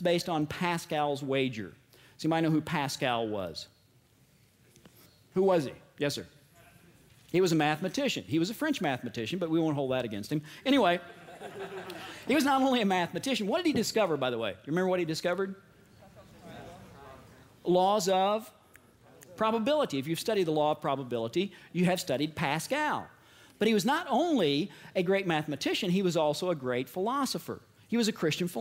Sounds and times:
Speech: 0.0s - 3.7s, 5.4s - 11.1s, 12.3s - 28.6s.

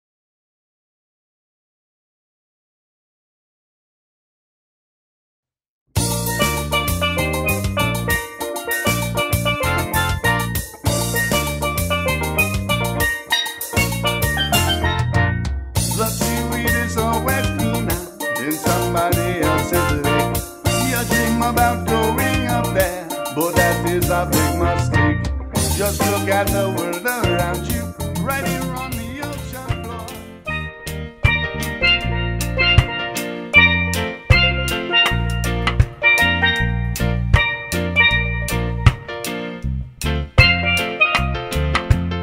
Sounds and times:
Drum: 6.0s - 39.4s, 40.0s - 42.2s.

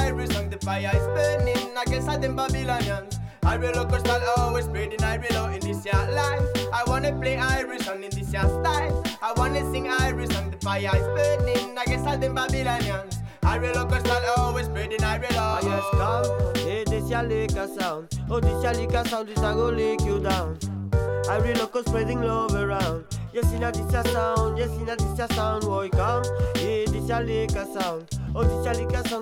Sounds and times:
Music: 0.0s - 29.2s.

